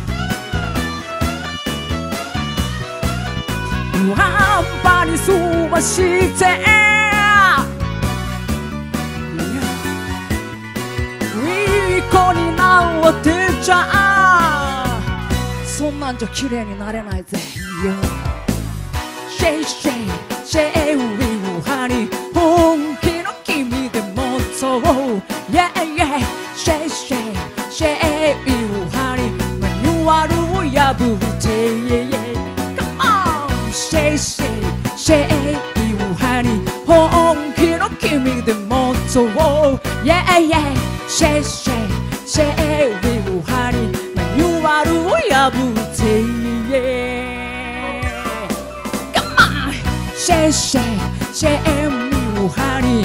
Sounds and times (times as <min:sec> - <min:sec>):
Music of Asia: 0:00.0 - 0:16.7, 0:17.3 - 0:53.0
Happy music: 0:00.0 - 0:53.0.